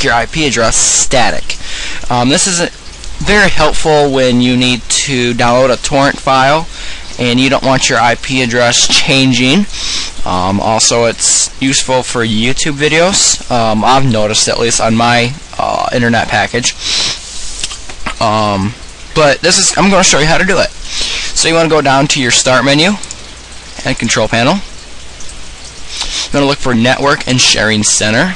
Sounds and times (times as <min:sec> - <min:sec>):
Speech: 0:00.0 - 0:16.8, 0:18.1 - 0:23.1, 0:23.8 - 0:24.7, 0:26.1 - 0:28.3.